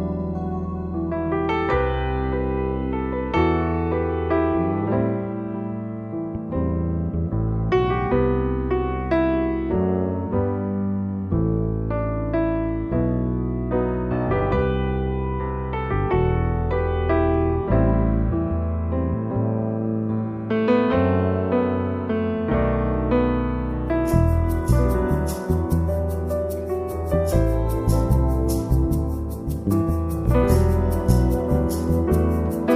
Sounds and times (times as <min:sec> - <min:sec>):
Music: 0:00.0 - 0:32.7.